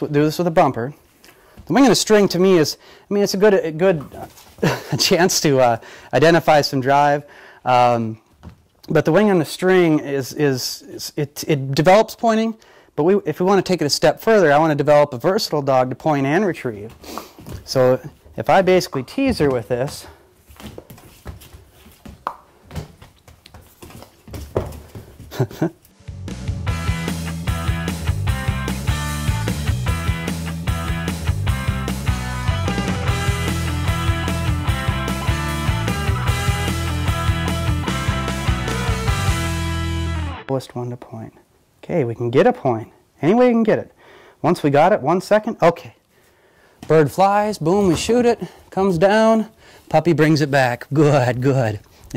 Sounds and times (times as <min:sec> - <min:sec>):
Speech: 0:00.0 - 0:01.0, 0:01.7 - 0:04.4, 0:05.0 - 0:08.2, 0:08.9 - 0:17.0, 0:17.6 - 0:20.2, 0:40.5 - 0:46.0, 0:46.8 - 0:52.1.